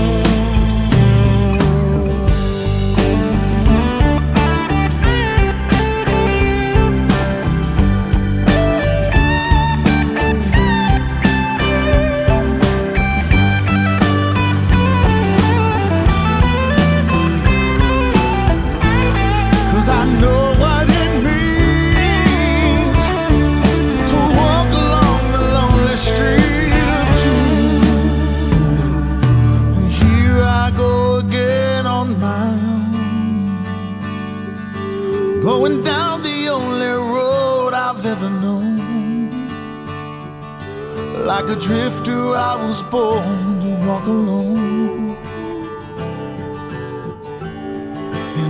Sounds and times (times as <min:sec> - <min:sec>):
Independent music: 0:00.0 - 0:48.4.